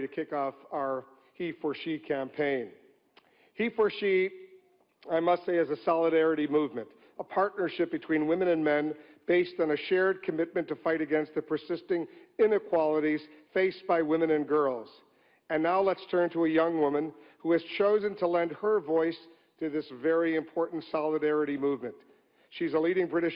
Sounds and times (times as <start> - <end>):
Male speech, man speaking: 0.0 - 2.8, 3.6 - 4.4, 5.0 - 23.3
Narration, monologue: 0.0 - 23.3.